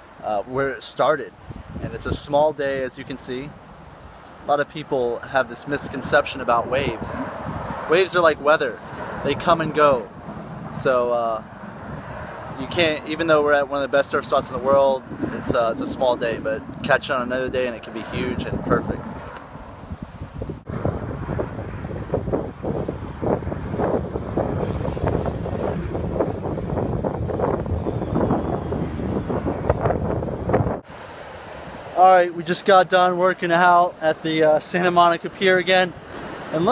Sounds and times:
Ocean: 0:00.0 - 0:36.7
Outside, urban or manmade: 0:00.0 - 0:36.7
Speech: 0:00.2 - 0:03.5, 0:04.5 - 0:07.2, 0:07.9 - 0:10.1, 0:10.8 - 0:11.4, 0:12.6 - 0:19.0, 0:32.0 - 0:36.7.

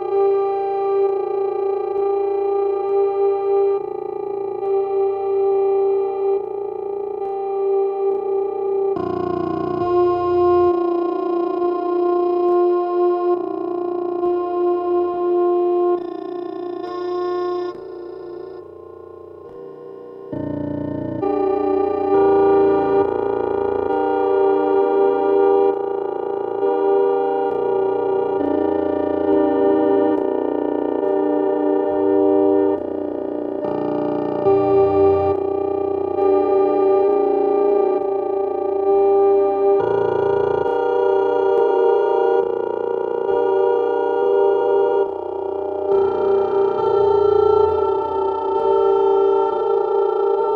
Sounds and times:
Effects unit: 0:00.0 - 0:50.5
Music: 0:00.0 - 0:50.5.

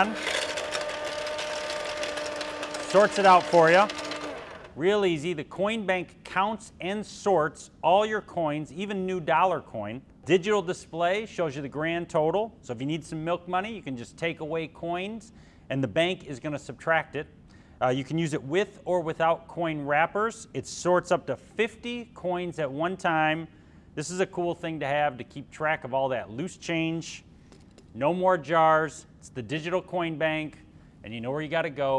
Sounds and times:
Speech: 0:02.8 - 0:03.9, 0:04.8 - 0:27.3, 0:28.0 - 0:31.9.

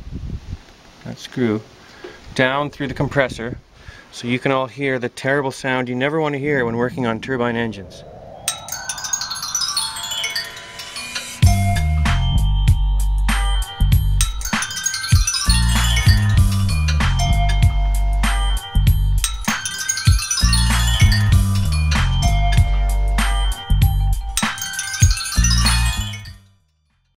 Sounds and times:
Music: 0:08.6 - 0:27.1.

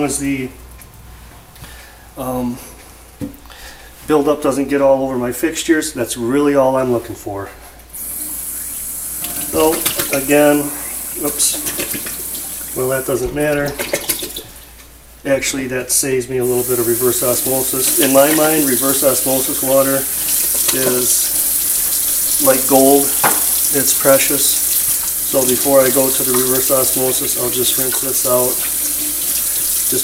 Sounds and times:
Water tap, faucet: 0:08.0 - 0:14.6, 0:16.4 - 0:30.0
Sink (filling or washing): 0:08.0 - 0:14.7, 0:16.4 - 0:30.0
Water: 0:08.6 - 0:14.6, 0:16.4 - 0:30.0.

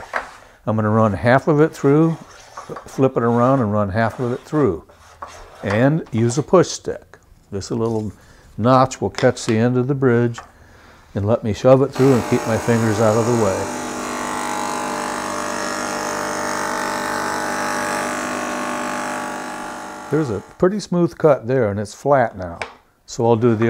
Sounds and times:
Speech: 0:00.7 - 0:04.9, 0:05.6 - 0:10.4, 0:11.2 - 0:13.7, 0:20.1 - 0:23.7.

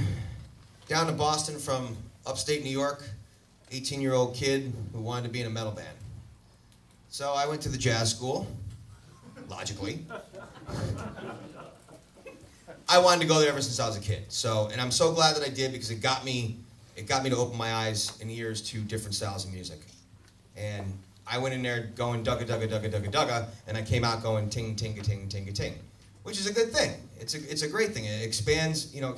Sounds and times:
Speech: 0:00.9 - 0:06.0, 0:07.1 - 0:08.6, 0:09.5 - 0:10.1, 0:12.9 - 0:20.0, 0:20.6 - 0:29.1.

